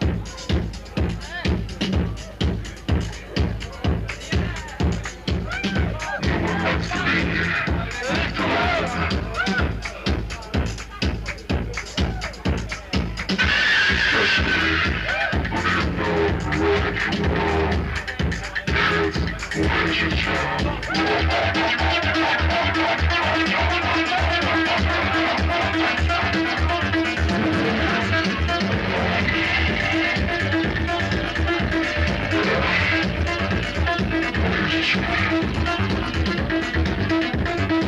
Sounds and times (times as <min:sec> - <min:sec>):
Music: 0:00.0 - 0:37.8.